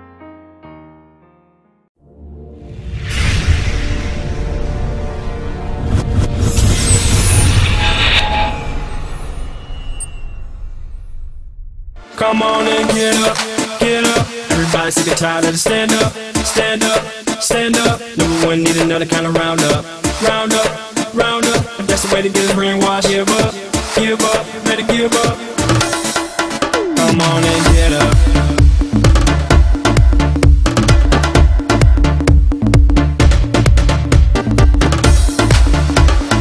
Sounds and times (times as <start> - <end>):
Afrobeat: 12.5 - 36.4.